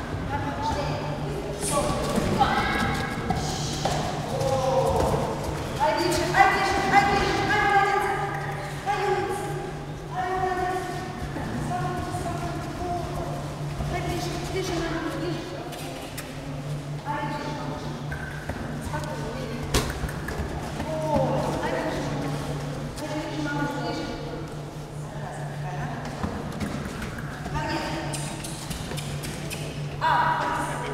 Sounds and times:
Speech: 0:00.3 - 0:16.4, 0:20.8 - 0:26.2, 0:27.5 - 0:28.4.

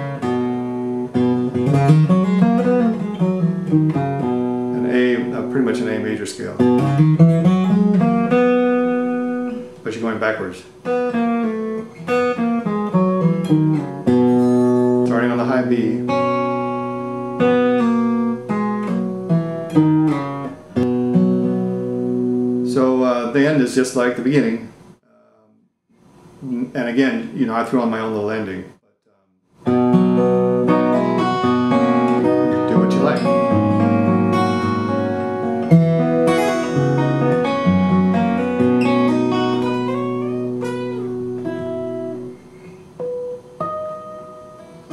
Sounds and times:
Acoustic guitar: 0:00.0 - 0:24.6, 0:29.6 - 0:44.9
Speech: 0:04.8 - 0:06.7, 0:09.8 - 0:10.7, 0:15.0 - 0:16.1, 0:22.7 - 0:25.5, 0:26.4 - 0:29.3, 0:32.7 - 0:33.3
Rock music: 0:29.8 - 0:41.6.

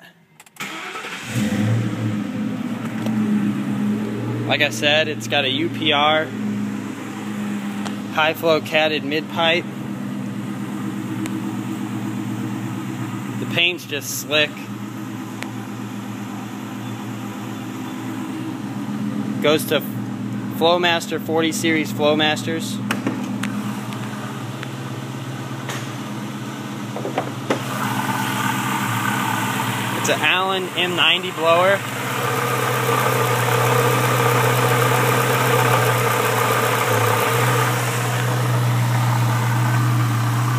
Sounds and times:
Car: 0:00.0 - 0:40.5
Outside, urban or manmade: 0:00.0 - 0:40.5
Speech: 0:04.5 - 0:06.3, 0:08.1 - 0:09.7, 0:13.4 - 0:14.7, 0:19.4 - 0:20.0, 0:20.6 - 0:22.9, 0:30.0 - 0:31.8.

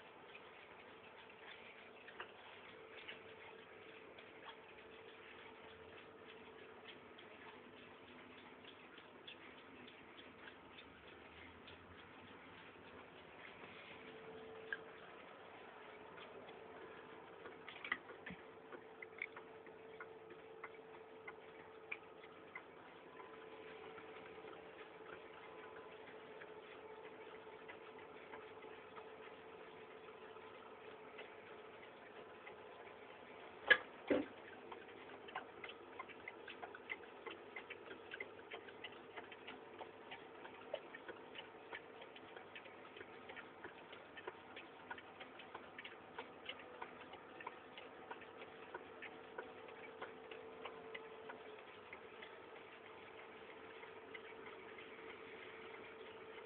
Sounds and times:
Tick-tock: 0:00.0 - 0:56.4.

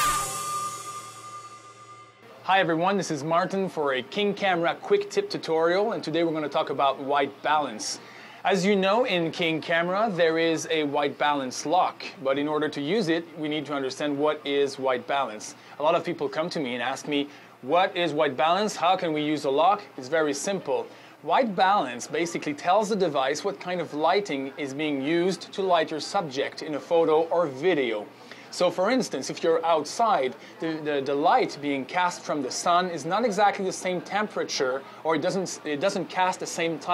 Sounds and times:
Speech: 0:02.3 - 0:36.9.

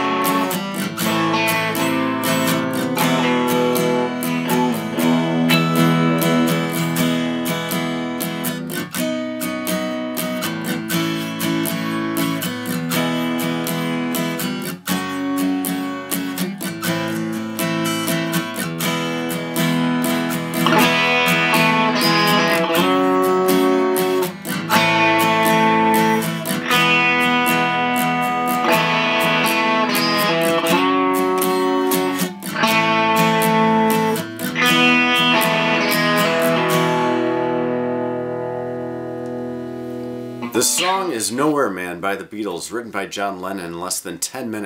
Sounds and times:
Strum: 0:00.0 - 0:10.4, 0:12.0 - 0:41.7
Electric guitar: 0:00.0 - 0:41.6
Acoustic guitar: 0:00.0 - 0:44.6.

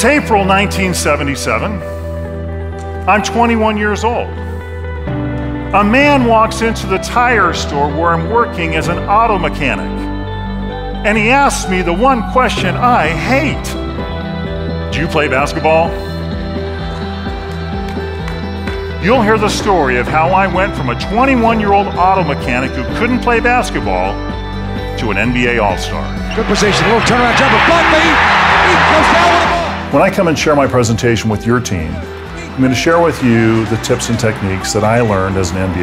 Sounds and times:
Music: 0:00.0 - 0:35.8
Speech: 0:03.1 - 0:04.3, 0:05.8 - 0:10.0, 0:11.0 - 0:13.8, 0:15.0 - 0:15.9, 0:19.0 - 0:24.2, 0:25.0 - 0:35.8.

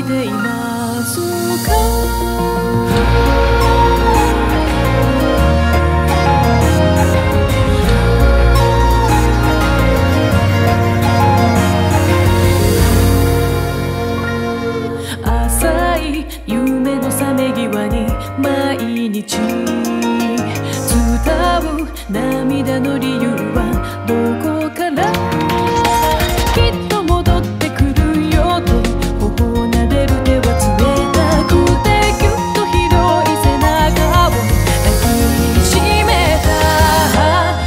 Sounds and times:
Music: 0:00.0 - 0:37.6.

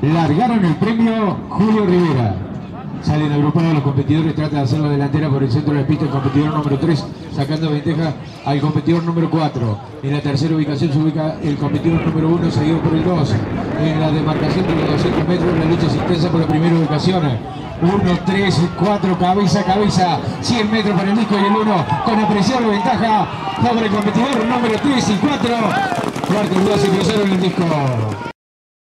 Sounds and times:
Speech: 0:00.0 - 0:28.3.

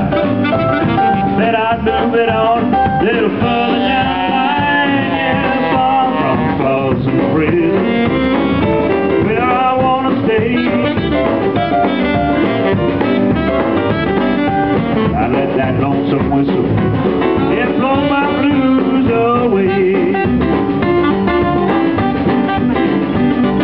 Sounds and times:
Saxophone: 0:00.0 - 0:23.6
Singing: 0:01.4 - 0:07.8.

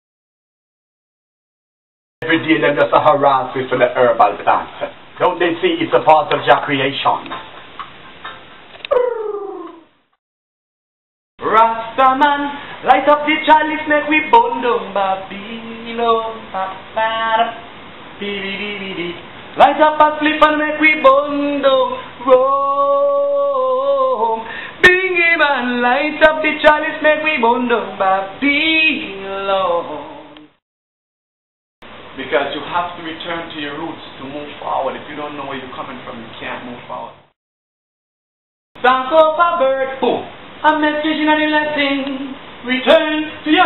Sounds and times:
Speech: 0:02.2 - 0:07.4, 0:32.2 - 0:37.2, 0:39.5 - 0:40.3
Inside, small room: 0:02.2 - 0:10.2, 0:11.4 - 0:30.6, 0:38.8 - 0:43.6.

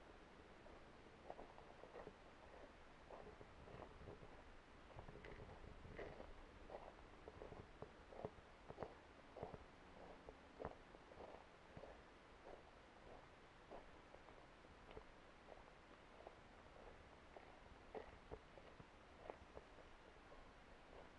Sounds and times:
Walk, footsteps: 0:00.7 - 0:21.1.

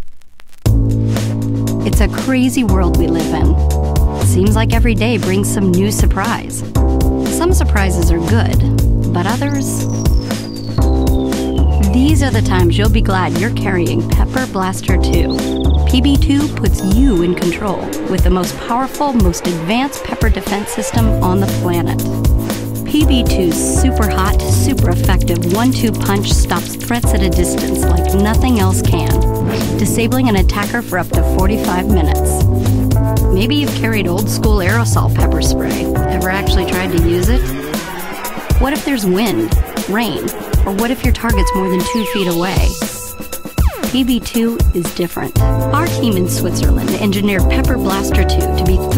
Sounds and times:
Music: 0:00.6 - 0:48.9
Speech: 0:01.8 - 0:03.6, 0:04.2 - 0:06.7, 0:07.3 - 0:09.9, 0:11.8 - 0:22.1, 0:22.9 - 0:32.4, 0:33.3 - 0:37.5, 0:38.6 - 0:43.0, 0:43.9 - 0:48.9.

